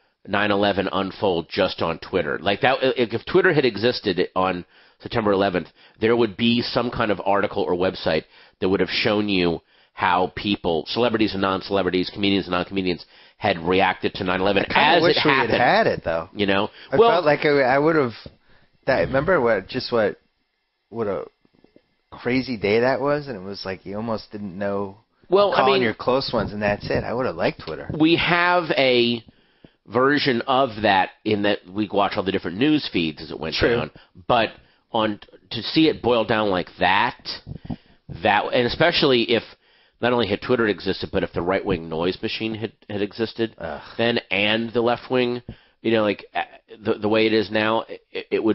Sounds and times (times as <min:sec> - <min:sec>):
Speech: 0:00.3 - 0:18.3, 0:18.9 - 0:20.2, 0:21.0 - 0:21.3, 0:22.2 - 0:29.3, 0:29.9 - 0:48.5.